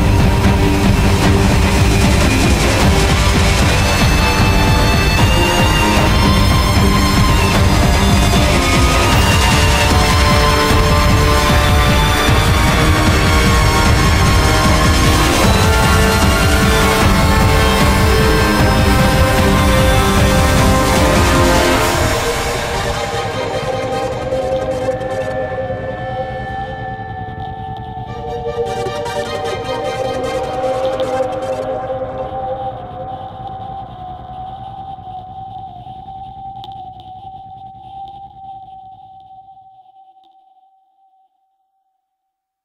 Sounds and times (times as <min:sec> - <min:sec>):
Music: 0:00.0 - 0:42.0.